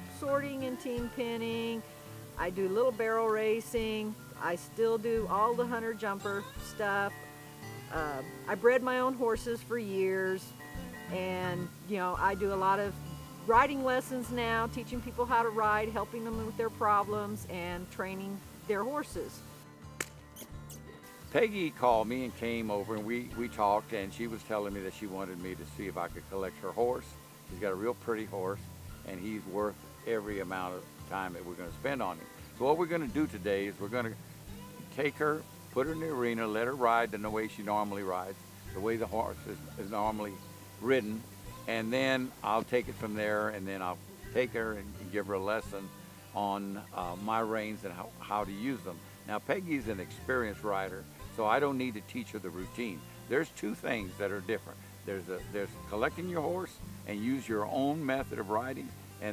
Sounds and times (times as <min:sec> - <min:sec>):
Speech: 0:00.1 - 0:01.8, 0:02.4 - 0:07.1, 0:07.9 - 0:10.5, 0:11.1 - 0:19.4, 0:21.3 - 0:34.2, 0:34.9 - 0:59.3.